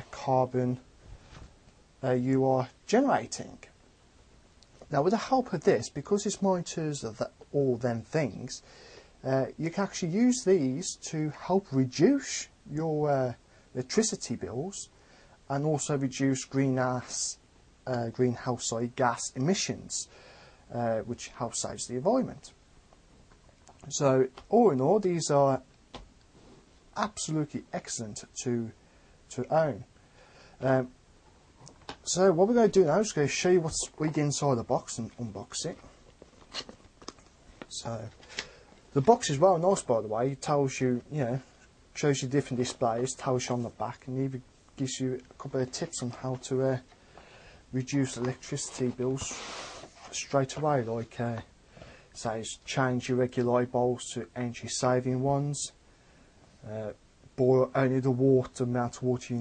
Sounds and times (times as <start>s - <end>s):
Speech: 0.0s - 0.9s, 2.0s - 3.8s, 4.8s - 8.6s, 9.2s - 14.9s, 15.5s - 20.1s, 20.7s - 22.6s, 23.8s - 25.7s, 27.0s - 29.9s, 30.6s - 31.0s, 32.0s - 36.0s, 37.7s - 38.2s, 38.9s - 46.9s, 47.7s - 51.5s, 52.2s - 55.8s, 56.6s - 59.4s.